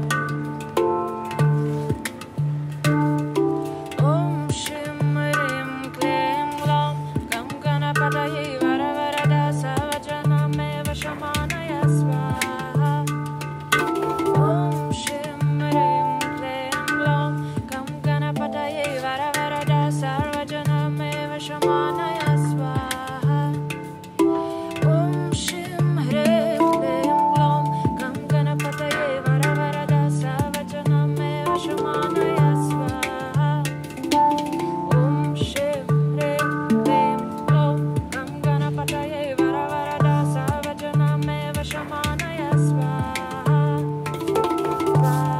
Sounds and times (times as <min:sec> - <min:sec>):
Mantra: 0:04.0 - 0:13.1, 0:24.9 - 0:33.6, 0:34.9 - 0:45.4.